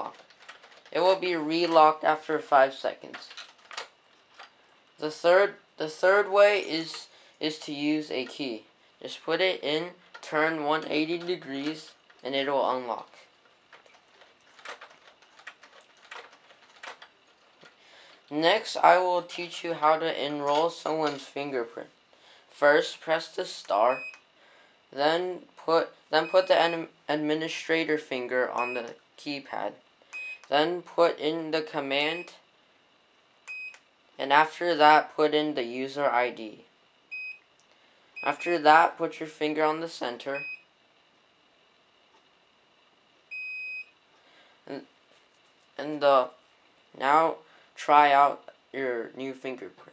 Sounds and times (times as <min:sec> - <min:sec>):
Speech: 0:00.0 - 0:00.2, 0:00.9 - 0:03.3, 0:05.0 - 0:13.3, 0:18.3 - 0:21.9, 0:22.6 - 0:24.1, 0:25.0 - 0:29.8, 0:30.5 - 0:32.4, 0:34.2 - 0:36.7, 0:38.2 - 0:40.4, 0:44.7 - 0:44.9, 0:45.8 - 0:46.4, 0:47.0 - 0:49.9.